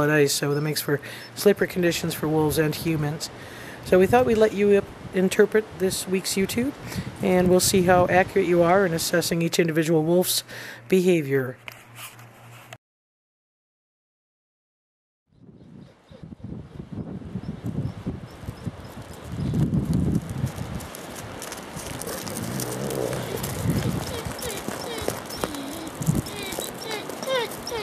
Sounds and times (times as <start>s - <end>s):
Speech: 0.0s - 3.3s, 3.9s - 11.6s
Wind noise (microphone): 3.9s - 5.2s, 5.8s - 8.4s, 15.3s - 27.7s.